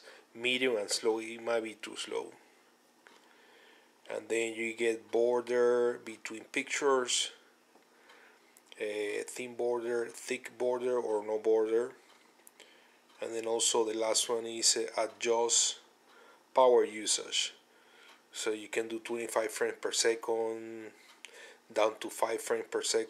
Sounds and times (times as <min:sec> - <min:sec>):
Speech: 0:00.0 - 0:02.4, 0:04.1 - 0:07.5, 0:08.7 - 0:12.0, 0:13.2 - 0:15.9, 0:16.6 - 0:17.6, 0:18.4 - 0:21.0, 0:21.7 - 0:23.1
Inside, small room: 0:00.0 - 0:23.1.